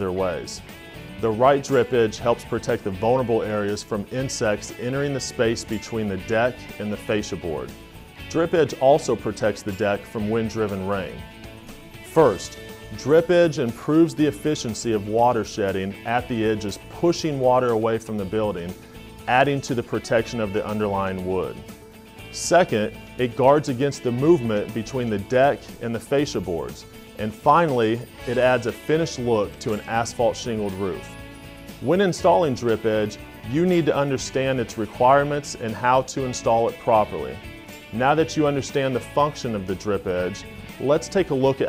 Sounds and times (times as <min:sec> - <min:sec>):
Speech: 0:00.0 - 0:00.6, 0:01.2 - 0:07.7, 0:08.3 - 0:11.2, 0:12.1 - 0:21.6, 0:22.3 - 0:31.1, 0:31.8 - 0:37.4, 0:38.0 - 0:41.6
Music: 0:00.0 - 0:41.6.